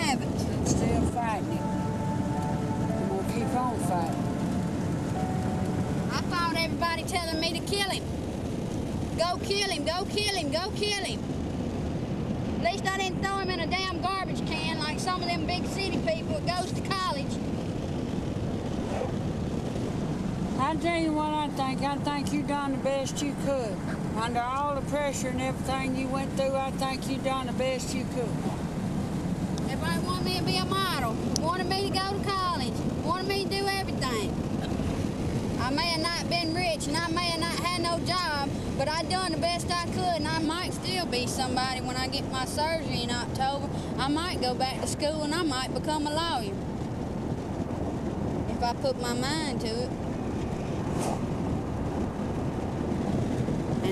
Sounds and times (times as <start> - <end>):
Speech: 12.6 - 17.4, 20.6 - 28.5, 29.6 - 34.3, 35.6 - 46.6, 48.5 - 49.9.